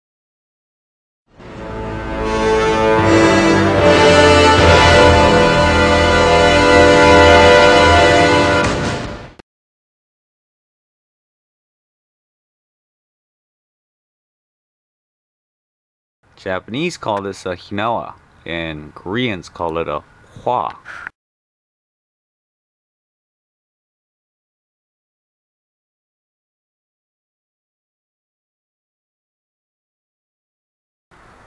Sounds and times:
Speech: 16.4 - 20.9.

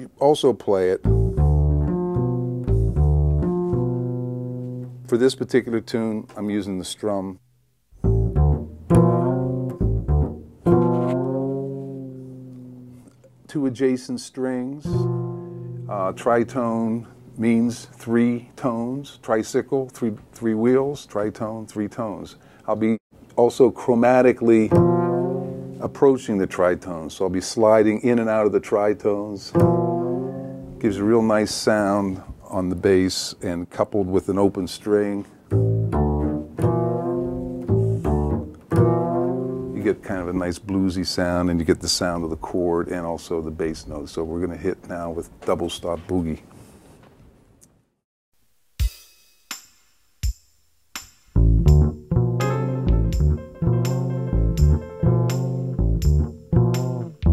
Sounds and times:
Double bass: 1.0 - 5.6, 8.0 - 13.4, 14.9 - 18.0, 24.6 - 26.1, 29.5 - 31.2, 35.5 - 40.4, 51.4 - 57.3.

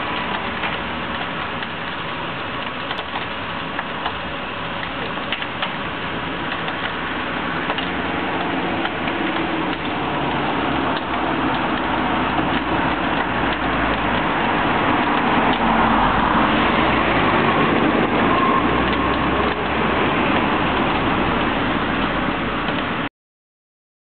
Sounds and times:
Car: 0.0 - 23.1
Accelerating, revving, vroom: 13.4 - 21.3.

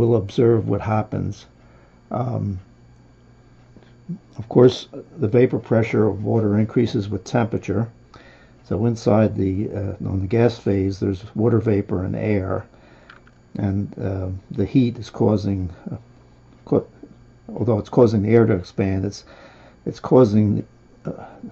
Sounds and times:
Speech: 0.0 - 1.5, 2.1 - 2.7, 4.1 - 8.0, 8.6 - 12.7, 13.6 - 21.5.

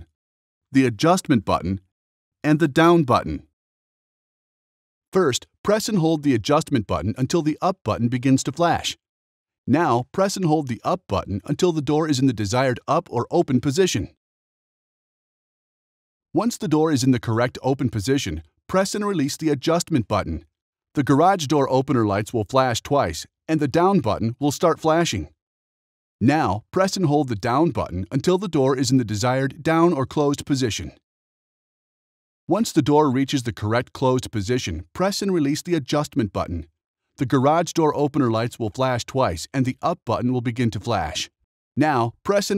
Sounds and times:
Speech: 0.8 - 3.5, 5.1 - 9.0, 9.7 - 14.2, 16.4 - 25.4, 26.2 - 31.0, 32.5 - 42.5.

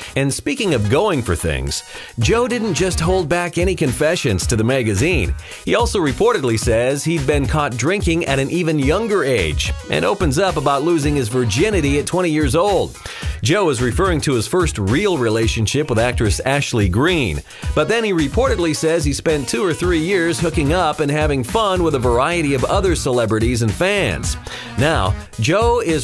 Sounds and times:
Music: 0.0 - 26.0
Speech: 0.0 - 26.0.

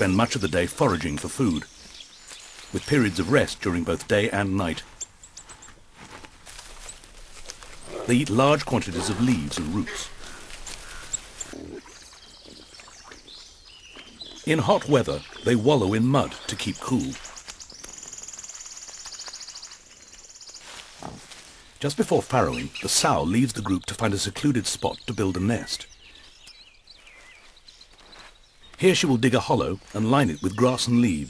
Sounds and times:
Speech: 0.0 - 1.7, 2.7 - 4.9, 8.0 - 10.1, 14.4 - 17.2, 21.8 - 25.9, 28.8 - 31.3
Outside, rural or natural: 0.0 - 31.3.

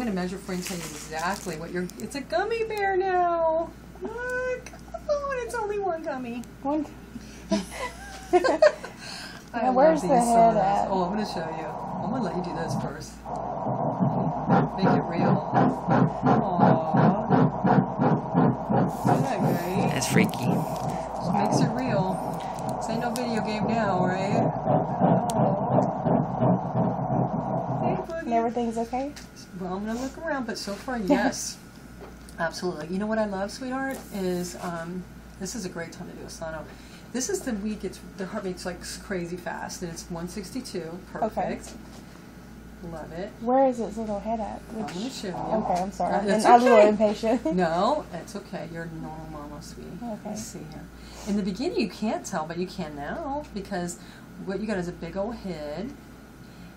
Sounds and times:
Speech: 19.2 - 22.3, 42.8 - 53.8.

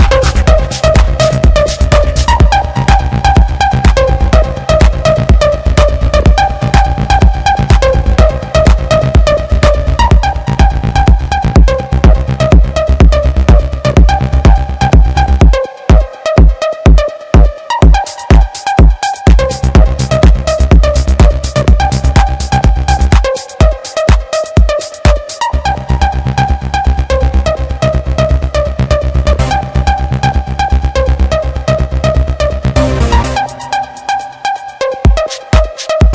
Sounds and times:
Techno: 0.0 - 36.1.

